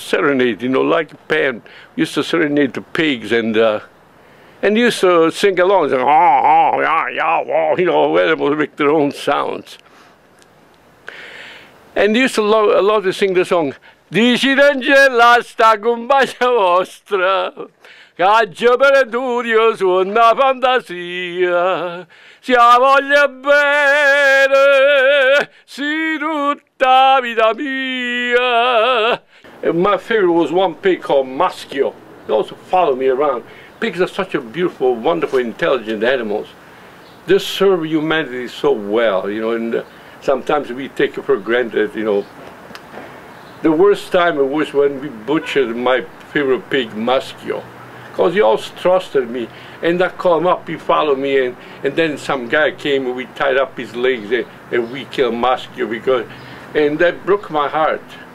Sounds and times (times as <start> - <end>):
Speech: 0.0 - 3.9, 4.6 - 9.8, 12.0 - 21.5, 29.6 - 36.6, 37.3 - 42.3, 43.6 - 58.2.